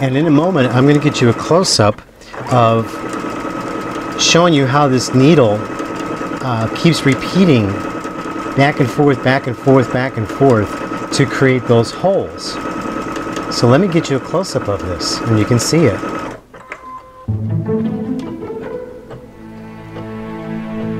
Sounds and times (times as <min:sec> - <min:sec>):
Speech: 0:00.0 - 0:03.0, 0:04.2 - 0:05.7, 0:06.4 - 0:07.8, 0:08.6 - 0:12.6, 0:13.5 - 0:16.1
Sewing machine: 0:00.0 - 0:16.4.